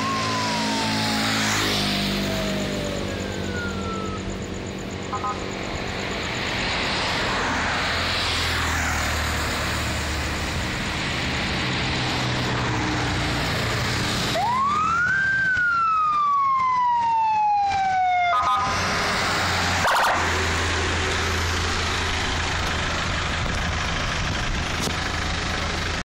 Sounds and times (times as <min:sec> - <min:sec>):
Police car (siren): 0:00.0 - 0:10.9, 0:12.0 - 0:21.6
Car: 0:00.0 - 0:26.0.